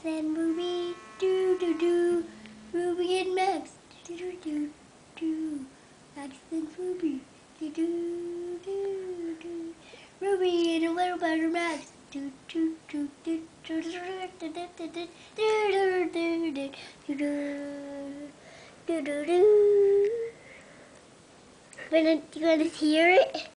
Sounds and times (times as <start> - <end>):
Child singing: 0.0 - 20.4
Speech: 21.8 - 23.5.